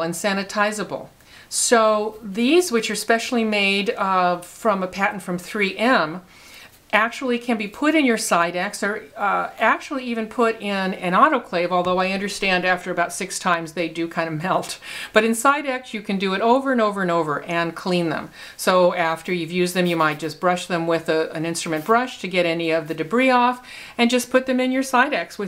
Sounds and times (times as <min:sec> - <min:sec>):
Speech: 0:00.0 - 0:06.3, 0:06.9 - 0:25.4.